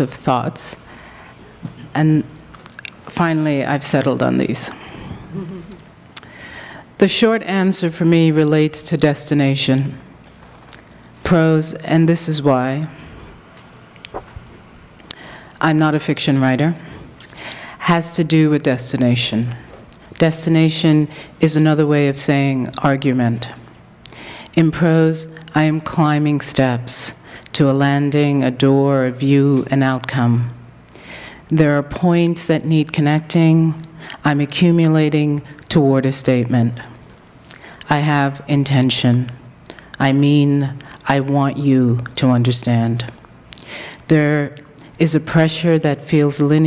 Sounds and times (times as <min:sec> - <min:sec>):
Speech: 0:07.0 - 0:10.0, 0:11.2 - 0:13.0, 0:24.6 - 0:30.6, 0:31.5 - 0:36.9, 0:37.9 - 0:39.4, 0:40.0 - 0:43.2, 0:44.1 - 0:46.6.